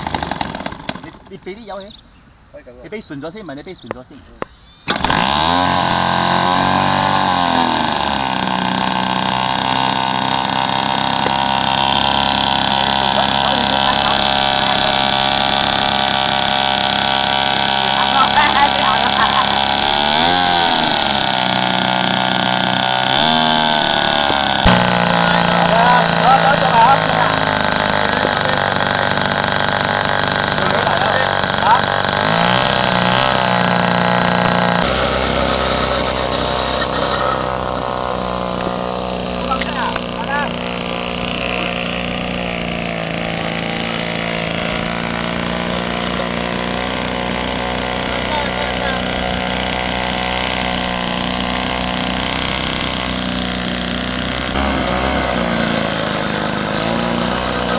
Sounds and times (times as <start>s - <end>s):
Idling: 0.0s - 1.4s, 4.9s - 57.7s
Vehicle: 0.0s - 57.7s
Accelerating, revving, vroom: 5.0s - 27.6s, 32.1s - 37.4s, 54.4s - 57.7s.